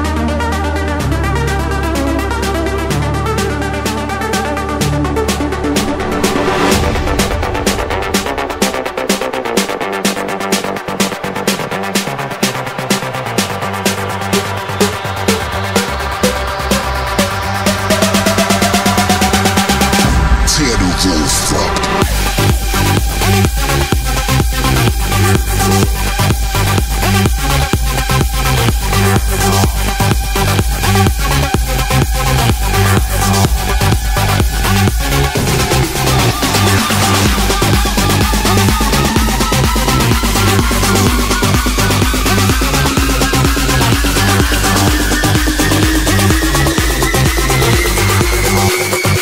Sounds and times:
Electronic dance music: 0:00.9 - 0:49.2.

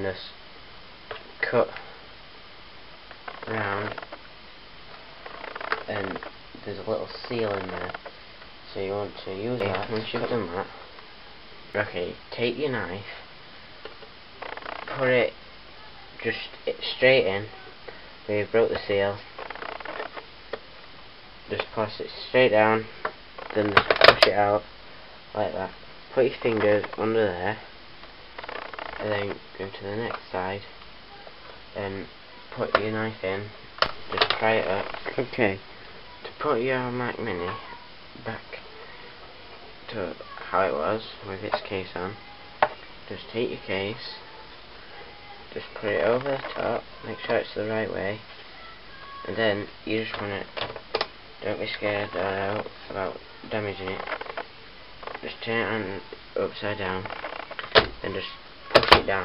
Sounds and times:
Inside, small room: 0:00.0 - 0:59.2
Speech: 0:03.4 - 0:04.0, 0:05.9 - 0:08.0, 0:08.7 - 0:10.8, 0:11.7 - 0:13.2, 0:14.9 - 0:19.2, 0:23.5 - 0:24.7, 0:25.4 - 0:27.7, 0:29.0 - 0:33.5, 0:34.1 - 0:35.6, 0:39.9 - 0:50.5, 0:51.4 - 0:54.1, 0:55.2 - 0:57.1, 0:58.0 - 0:59.2.

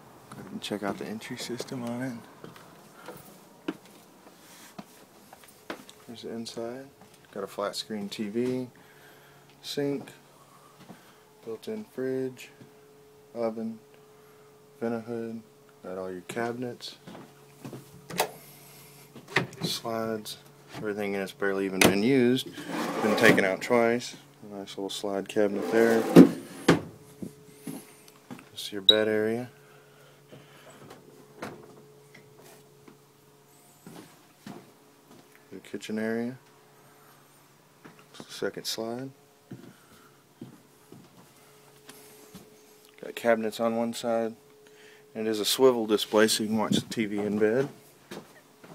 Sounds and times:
Speech: 0:00.3 - 0:02.3, 0:06.1 - 0:08.8, 0:09.6 - 0:10.2, 0:11.4 - 0:12.6, 0:13.3 - 0:13.8, 0:14.8 - 0:17.0, 0:19.6 - 0:26.2, 0:28.5 - 0:29.5, 0:35.5 - 0:36.4, 0:38.2 - 0:39.2, 0:43.0 - 0:44.4, 0:45.2 - 0:47.8.

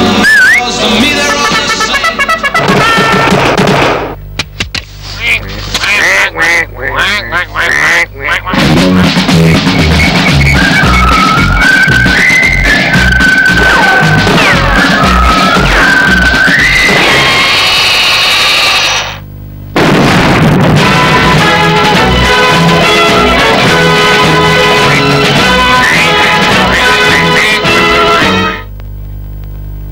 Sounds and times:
Music: 0:00.0 - 0:03.7, 0:08.5 - 0:17.6, 0:20.8 - 0:28.7.

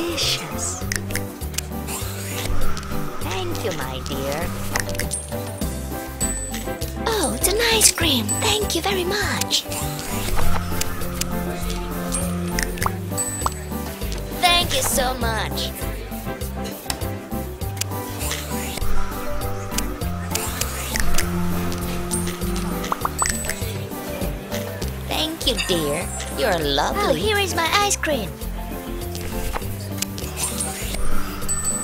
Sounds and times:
Music: 0:00.0 - 0:31.8
Speech: 0:07.1 - 0:09.6, 0:14.4 - 0:15.8, 0:25.1 - 0:28.4.

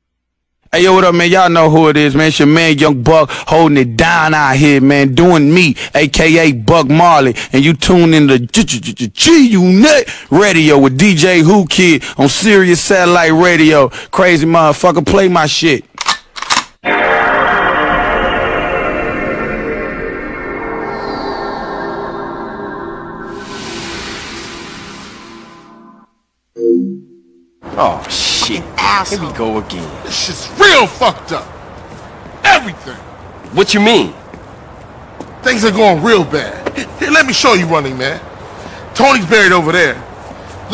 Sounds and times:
Speech: 0:00.7 - 0:15.9, 0:27.8 - 0:31.5, 0:39.0 - 0:40.0.

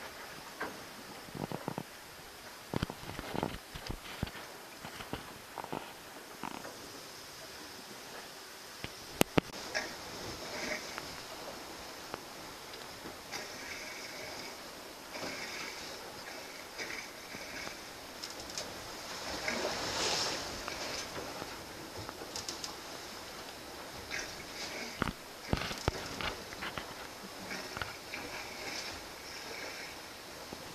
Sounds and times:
Sailboat, sailing ship: 0:00.0 - 0:30.7
Water: 0:00.0 - 0:30.7.

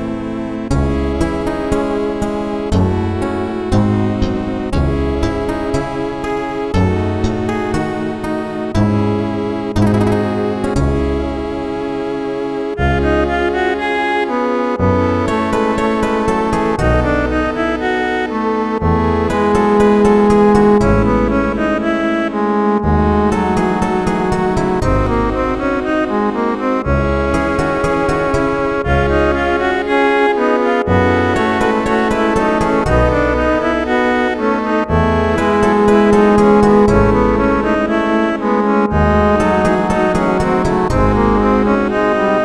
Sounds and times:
Theme music: 0:00.1 - 0:42.4.

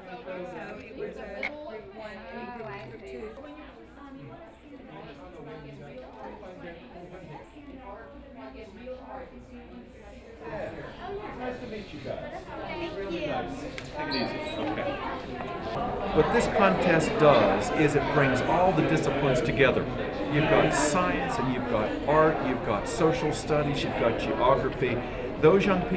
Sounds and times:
Speech: 0:00.0 - 0:25.9.

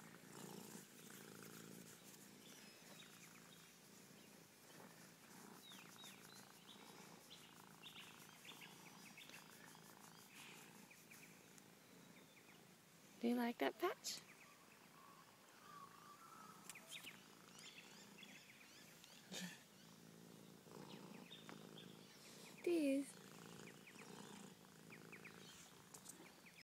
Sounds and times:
Speech: 0:13.2 - 0:14.2, 0:22.6 - 0:23.2.

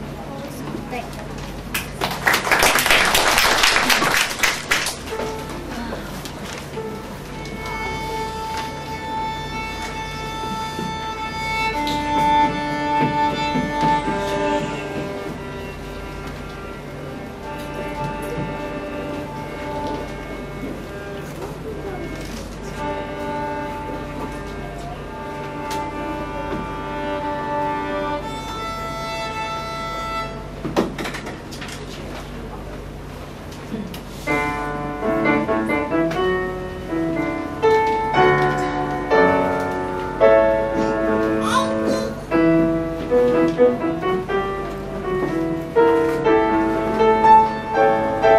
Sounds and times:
Violin, fiddle: 0:07.1 - 0:30.5.

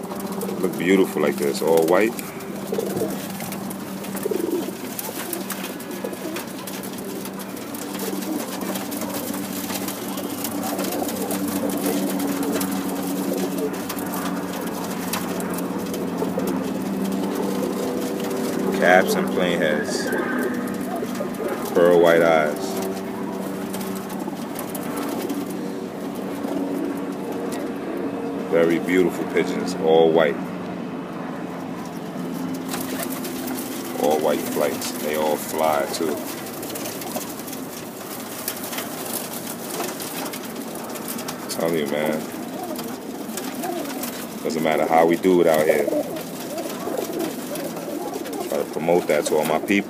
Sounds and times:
Pigeon, dove: 0:00.0 - 0:30.2, 0:31.4 - 0:49.9.

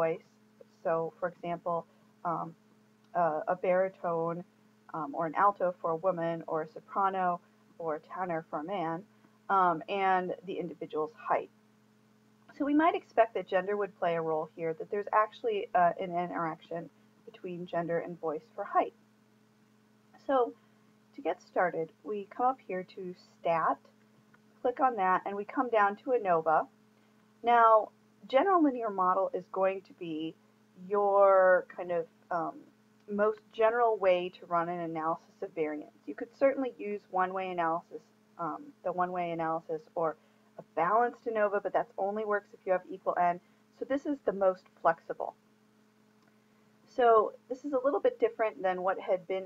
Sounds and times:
Speech: 0:00.0 - 0:11.5, 0:12.5 - 0:18.9, 0:20.2 - 0:20.6, 0:21.2 - 0:23.9, 0:24.6 - 0:26.7, 0:27.4 - 0:45.3, 0:46.9 - 0:49.4.

